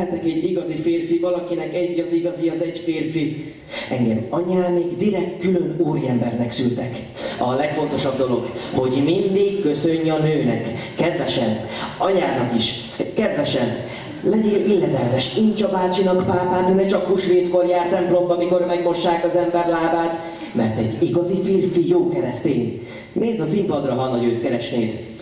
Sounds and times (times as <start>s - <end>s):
Speech: 0.0s - 25.2s.